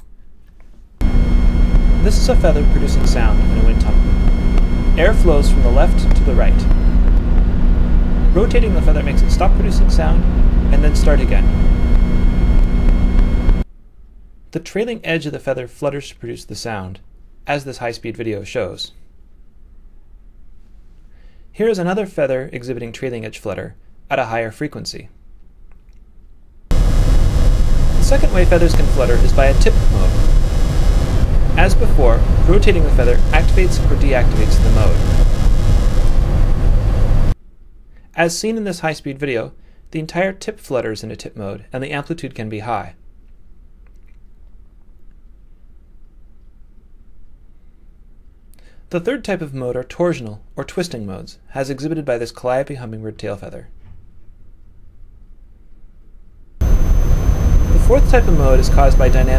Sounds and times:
Speech: 0:02.0 - 0:04.2, 0:05.0 - 0:06.7, 0:08.3 - 0:11.6, 0:14.5 - 0:19.0, 0:21.6 - 0:25.2, 0:28.0 - 0:30.2, 0:31.6 - 0:35.0, 0:38.1 - 0:43.0, 0:48.9 - 0:53.8, 0:57.8 - 0:59.3.

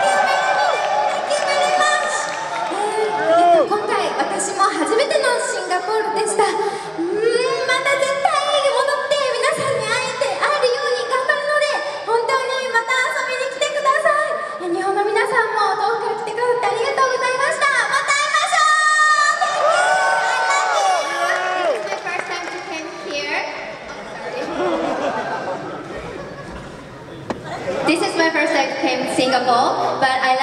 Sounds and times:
Female speech, woman speaking: 0:03.6 - 0:19.4, 0:27.9 - 0:30.4.

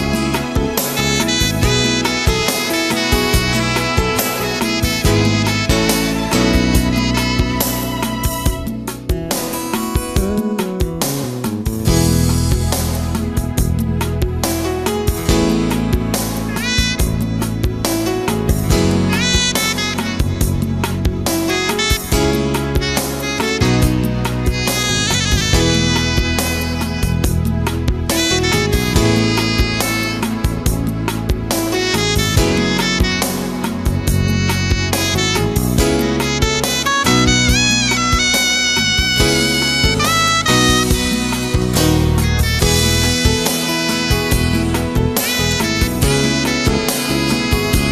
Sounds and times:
Music: 0:00.0 - 0:47.9.

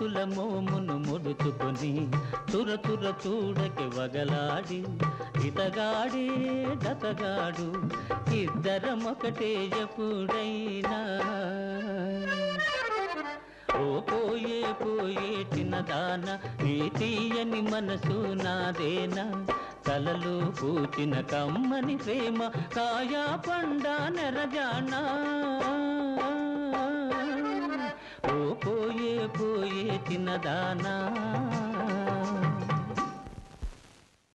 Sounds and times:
Music: 0:00.0 - 0:33.8.

